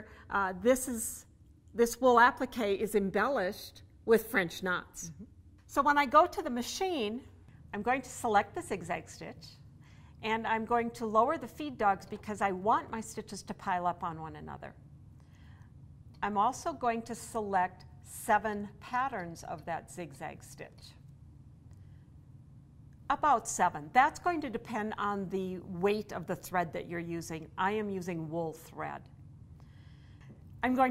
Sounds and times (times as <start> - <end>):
Speech: 0.0 - 9.6, 10.2 - 14.8, 16.2 - 21.0, 23.1 - 29.0, 30.6 - 30.9.